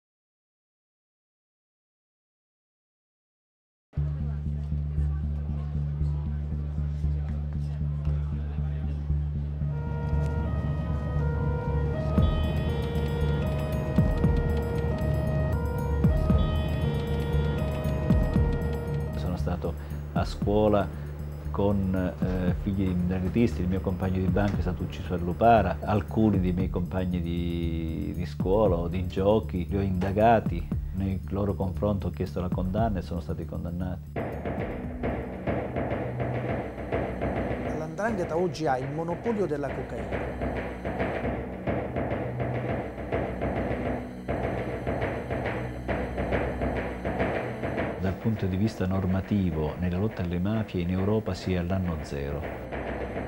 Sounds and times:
Music: 3.9s - 53.2s
Speech: 19.2s - 20.9s, 21.5s - 34.0s, 37.7s - 40.1s, 48.0s - 52.5s.

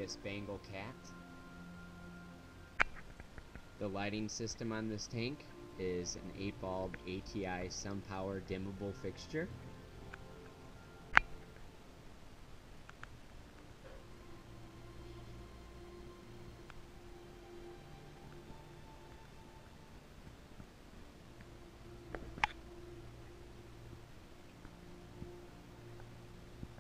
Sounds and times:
Speech: 0.0s - 1.0s, 3.8s - 9.5s
Inside, small room: 0.0s - 26.8s
Music: 0.0s - 26.8s.

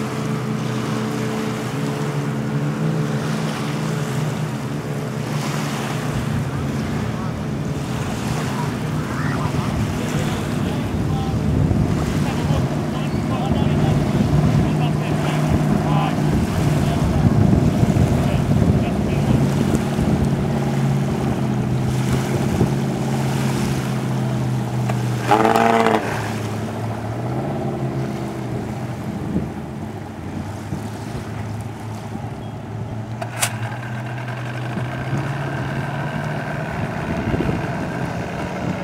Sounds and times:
Sailboat, sailing ship: 0.0s - 38.8s
Speech: 8.4s - 11.4s, 12.2s - 17.4s, 18.1s - 19.6s.

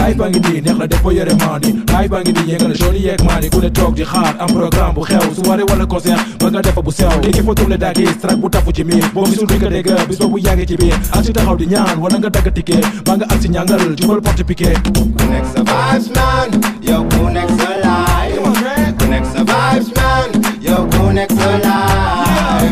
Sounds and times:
Rhythm and blues: 0.0s - 22.7s.

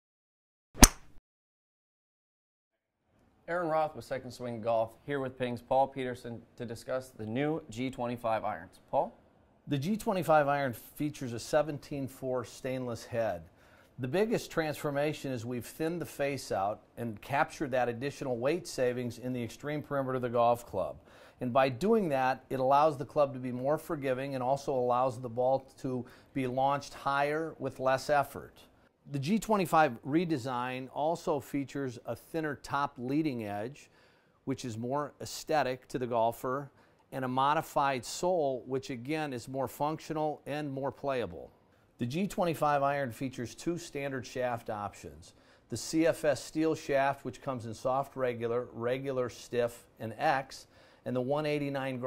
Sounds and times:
Speech: 3.4s - 33.9s, 34.5s - 52.0s.

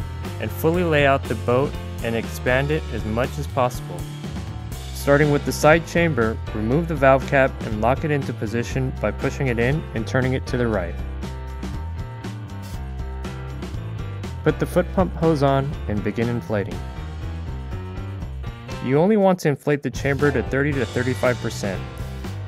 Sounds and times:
Music: 0.0s - 22.4s
Speech: 0.4s - 4.0s, 5.0s - 11.0s, 14.5s - 16.8s, 18.8s - 21.9s.

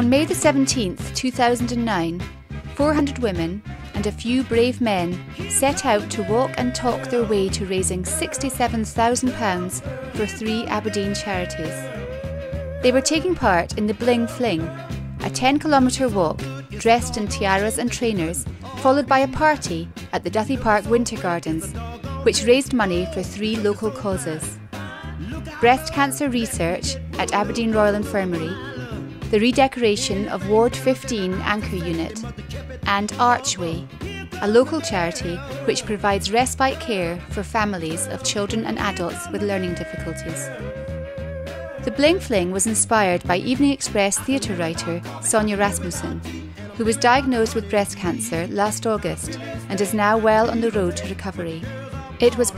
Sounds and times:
Speech: 0.0s - 2.2s, 2.8s - 11.9s, 12.8s - 24.6s, 25.6s - 32.3s, 32.9s - 40.6s, 41.9s - 51.6s, 52.2s - 52.5s
Music: 0.0s - 52.5s.

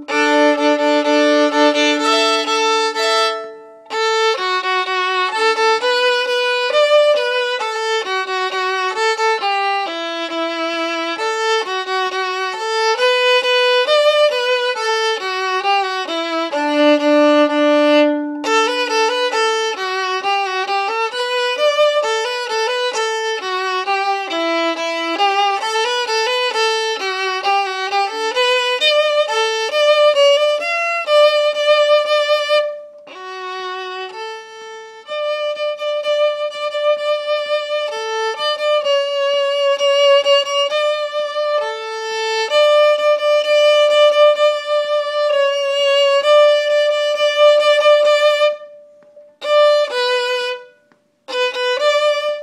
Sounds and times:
Violin, fiddle: 0.0s - 52.4s.

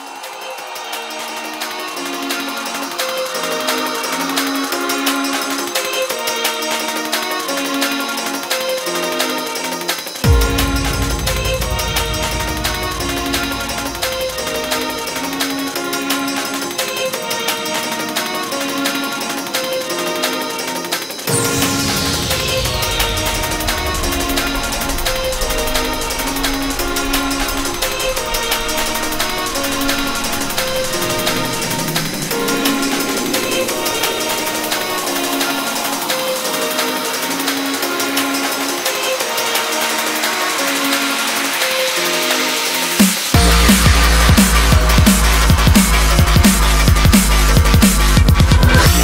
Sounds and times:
Music: 0.0s - 49.0s.

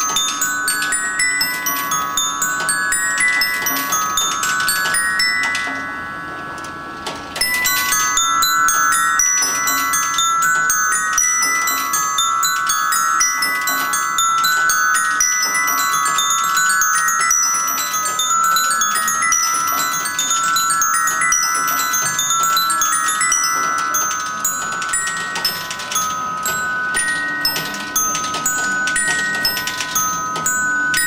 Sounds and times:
Bell: 0.0s - 31.0s.

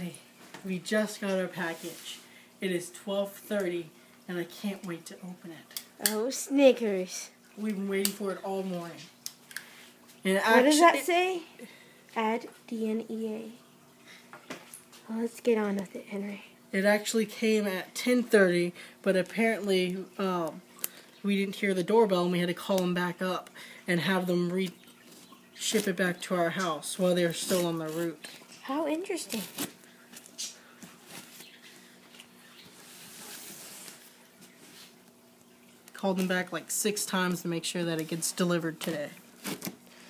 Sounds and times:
Inside, small room: 0.0s - 40.1s.

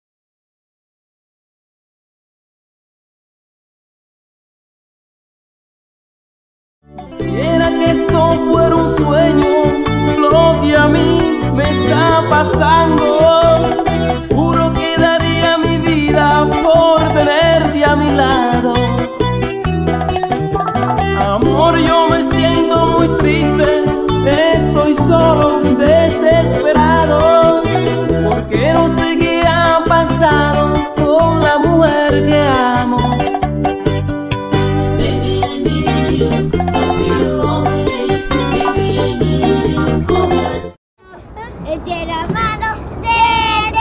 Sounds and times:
Soundtrack music: 7.0s - 40.7s.

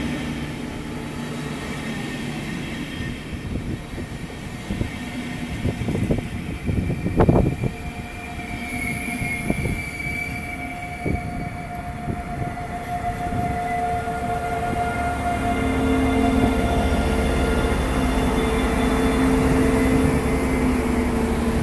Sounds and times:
Railroad car, train wagon: 0.0s - 21.6s
Train: 0.0s - 21.6s.

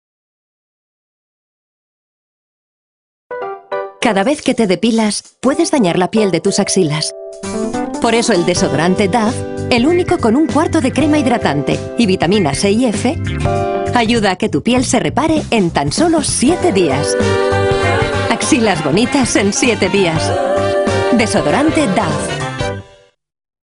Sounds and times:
Music: 3.3s - 23.2s
Speech: 4.0s - 7.1s, 8.0s - 13.2s, 13.9s - 17.2s, 17.9s - 20.4s, 21.1s - 22.3s.

